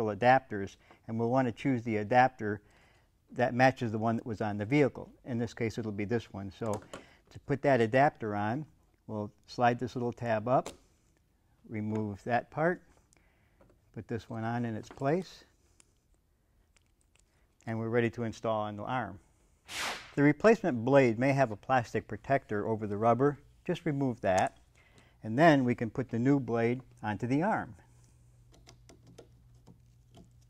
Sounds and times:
Speech: 0:00.0 - 0:02.6, 0:03.3 - 0:10.7, 0:11.7 - 0:12.8, 0:14.0 - 0:15.5, 0:17.6 - 0:19.2, 0:20.2 - 0:24.5, 0:25.2 - 0:27.8.

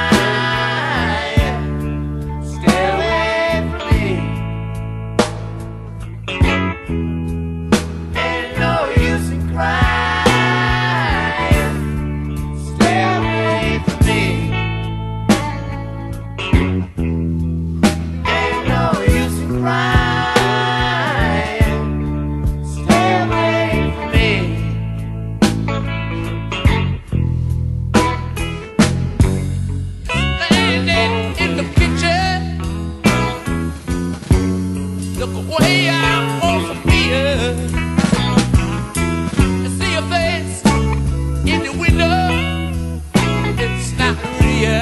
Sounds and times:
Music: 0:00.0 - 0:44.8.

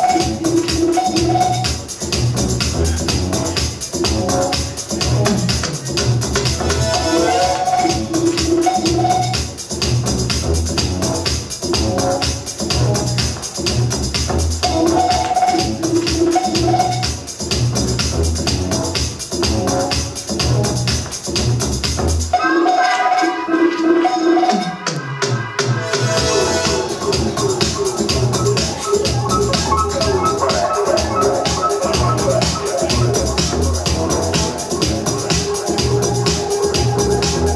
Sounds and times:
Musical instrument: 0:26.0 - 0:36.8.

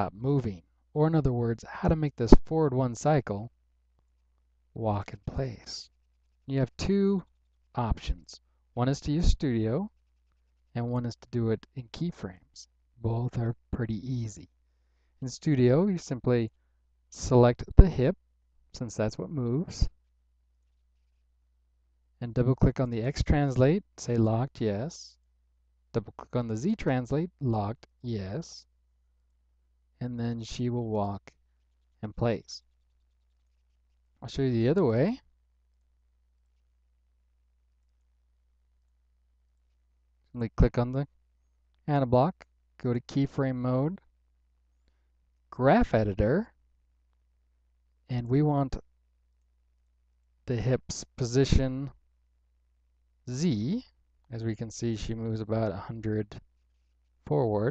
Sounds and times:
Speech: 0:00.0 - 0:03.5, 0:04.8 - 0:05.9, 0:06.5 - 0:10.0, 0:10.7 - 0:14.5, 0:15.2 - 0:16.6, 0:17.2 - 0:18.2, 0:18.8 - 0:20.0, 0:22.2 - 0:25.2, 0:26.0 - 0:28.7, 0:30.0 - 0:31.4, 0:32.0 - 0:32.7, 0:34.2 - 0:35.3, 0:40.3 - 0:41.1, 0:41.8 - 0:44.1, 0:45.5 - 0:46.6, 0:48.1 - 0:48.8, 0:50.5 - 0:52.0, 0:53.3 - 0:56.4, 0:57.2 - 0:57.7.

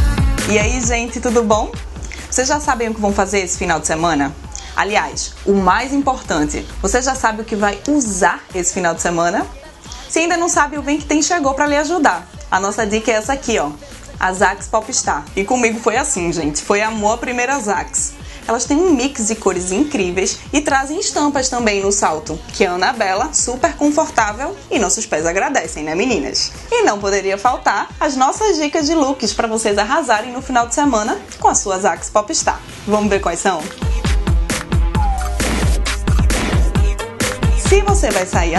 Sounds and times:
Music: 0:00.0 - 0:38.5
Speech: 0:00.5 - 0:33.8, 0:37.6 - 0:38.5.

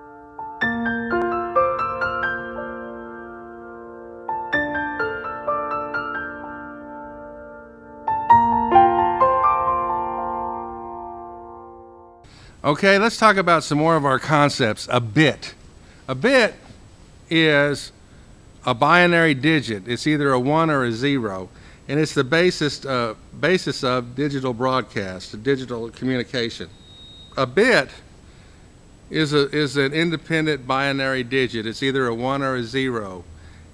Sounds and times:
Electric piano: 0:00.0 - 0:12.3
Speech: 0:12.6 - 0:16.7, 0:17.3 - 0:18.0, 0:18.6 - 0:26.7, 0:27.4 - 0:28.1, 0:29.1 - 0:33.3.

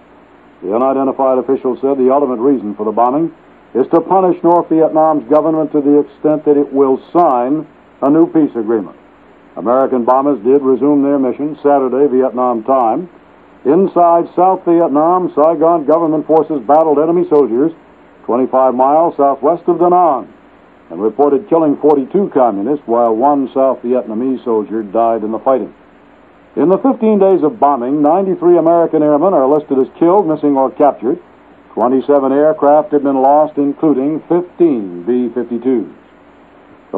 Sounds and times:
Radio: 0:00.6 - 0:09.0, 0:09.6 - 0:25.9, 0:26.6 - 0:36.2
Speech: 0:00.6 - 0:09.0, 0:09.6 - 0:25.8, 0:26.6 - 0:36.0.

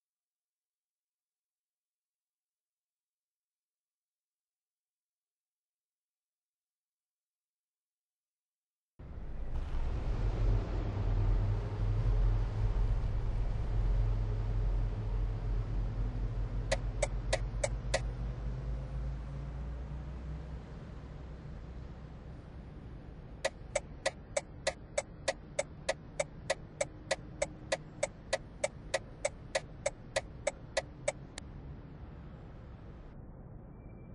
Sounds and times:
Vehicle: 0:09.0 - 0:34.1.

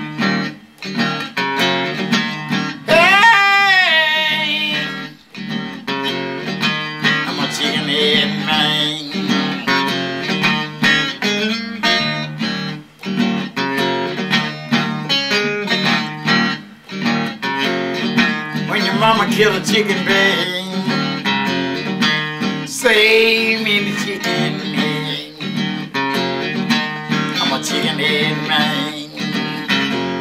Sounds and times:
Music: 0:00.0 - 0:30.2.

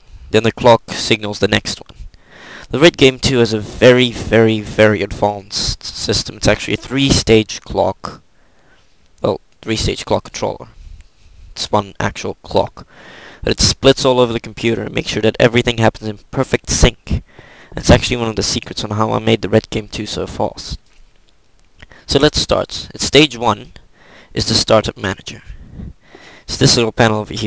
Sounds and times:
Speech: 0:00.3 - 0:02.0, 0:02.7 - 0:08.2, 0:09.2 - 0:10.8, 0:11.6 - 0:20.8, 0:22.1 - 0:23.8, 0:24.4 - 0:25.5, 0:26.5 - 0:27.4.

